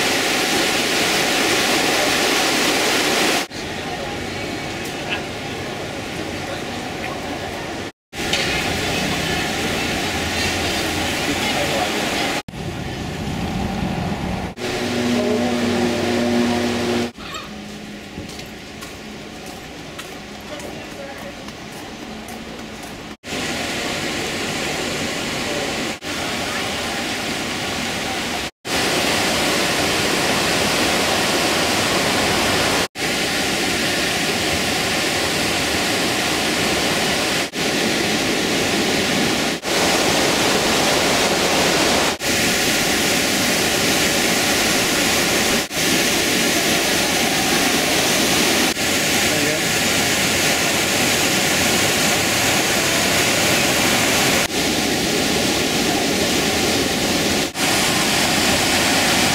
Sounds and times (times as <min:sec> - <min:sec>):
Speech: 0:03.5 - 0:12.4, 0:20.4 - 0:22.8, 0:49.2 - 0:49.7.